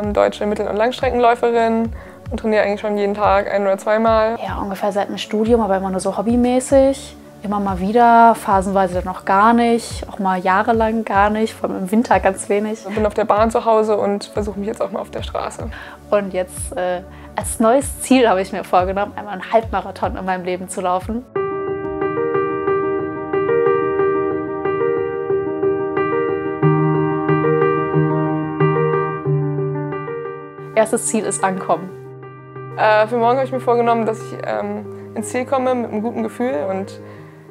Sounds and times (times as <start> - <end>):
Speech: 0.0 - 21.3, 30.8 - 31.9, 32.8 - 37.0
Music: 0.0 - 37.5.